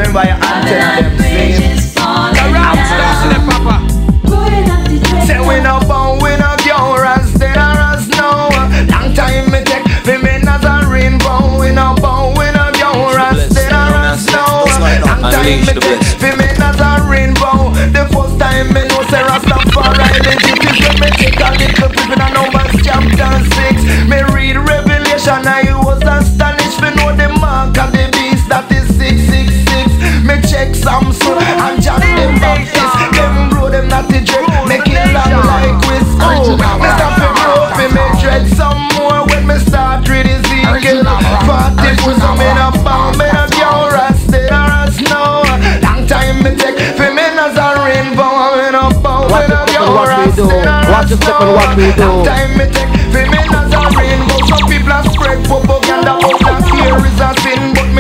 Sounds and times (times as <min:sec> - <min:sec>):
Music: 0:00.0 - 0:58.0.